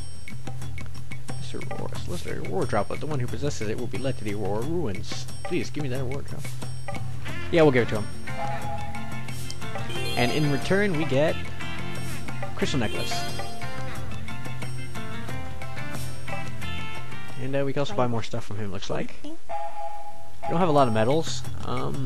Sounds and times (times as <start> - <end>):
Music: 0.0 - 18.8, 20.5 - 22.0
Speech: 1.4 - 6.4, 7.5 - 8.1, 12.6 - 13.3, 17.4 - 19.3, 20.5 - 22.0.